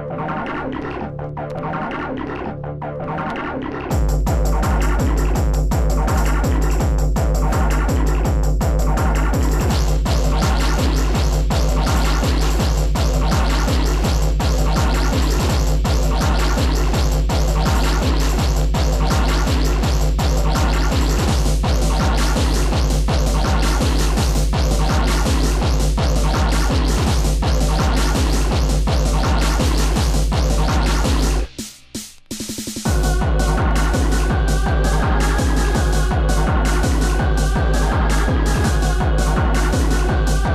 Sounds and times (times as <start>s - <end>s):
Drum machine: 3.1s - 40.5s.